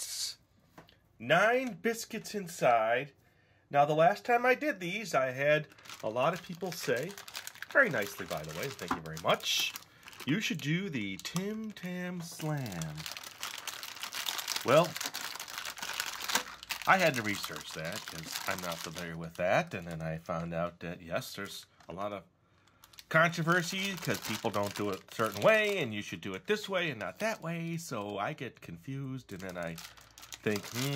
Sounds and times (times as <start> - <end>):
Speech: 0.0 - 0.4, 1.2 - 13.1, 14.6 - 15.0, 16.8 - 22.3, 23.1 - 29.8, 30.4 - 30.9
Inside, small room: 0.0 - 30.9
Crumpling, crinkling: 5.6 - 20.5, 22.6 - 25.9, 29.3 - 30.9.